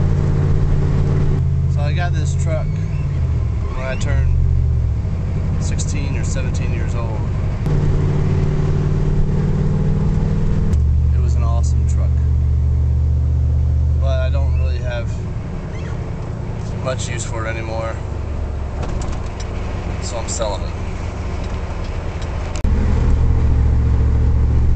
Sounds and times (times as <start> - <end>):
Truck: 0.0 - 24.7
Speech: 1.7 - 2.8, 3.7 - 4.4, 5.6 - 7.3, 11.1 - 12.3, 14.0 - 15.2, 16.8 - 18.0, 20.0 - 20.8.